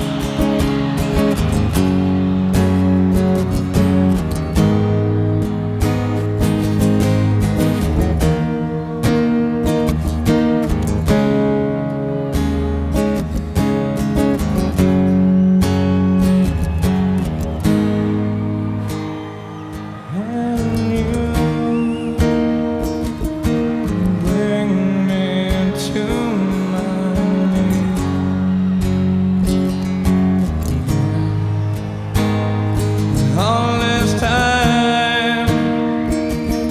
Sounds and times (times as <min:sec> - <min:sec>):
Music: 0:00.0 - 0:36.7.